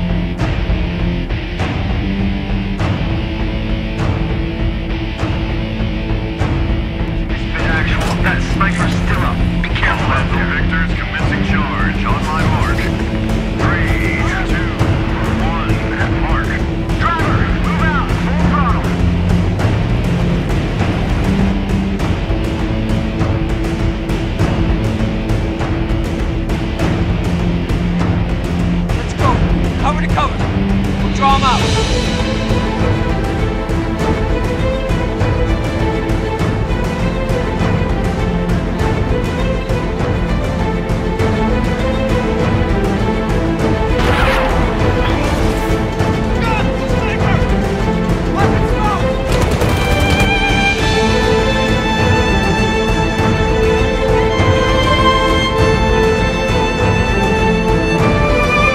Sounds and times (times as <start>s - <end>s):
Music: 0.0s - 58.7s
Speech: 7.4s - 12.9s, 13.6s - 19.0s, 29.0s - 30.4s, 31.0s - 31.7s, 46.4s - 47.5s, 48.3s - 49.1s.